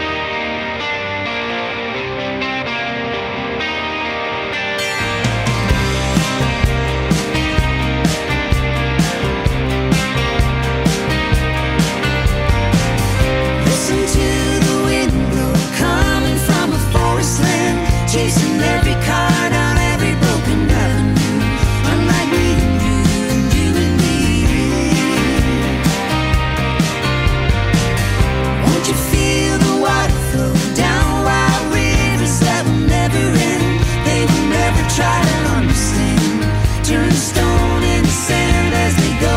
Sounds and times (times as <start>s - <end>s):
Music: 0.0s - 39.3s.